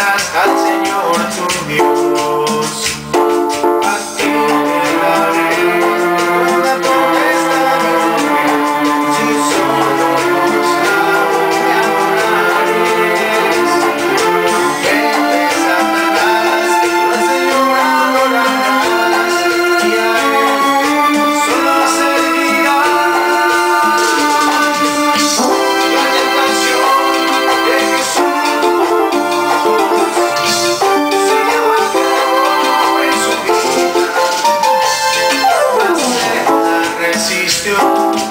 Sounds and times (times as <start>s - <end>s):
Piano: 0.0s - 38.3s
Synthesizer: 0.0s - 38.3s.